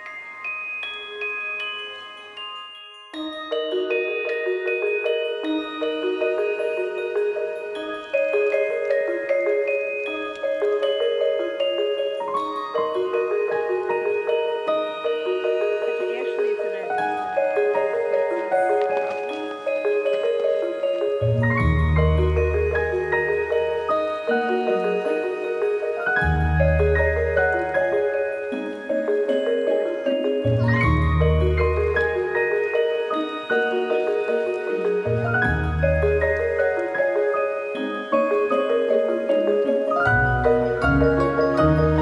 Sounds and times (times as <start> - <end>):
Music: 0.0 - 42.0.